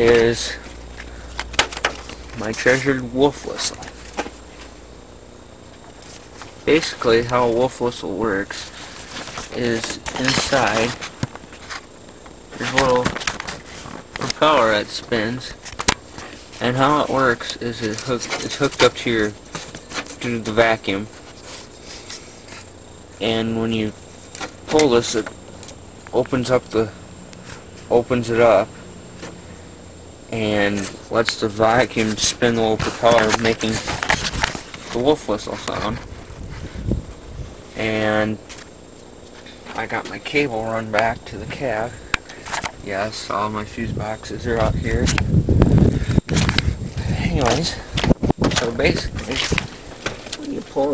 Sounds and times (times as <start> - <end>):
Speech: 0.0 - 0.7, 2.4 - 3.9, 6.6 - 8.7, 9.5 - 11.0, 12.5 - 13.2, 14.2 - 15.6, 16.6 - 19.4, 20.2 - 21.1, 23.2 - 24.0, 24.7 - 25.3, 26.1 - 27.0, 27.9 - 28.7, 30.3 - 34.0, 34.9 - 36.1, 37.8 - 38.4, 39.7 - 42.0, 42.8 - 45.2, 47.0 - 49.6, 50.4 - 50.9.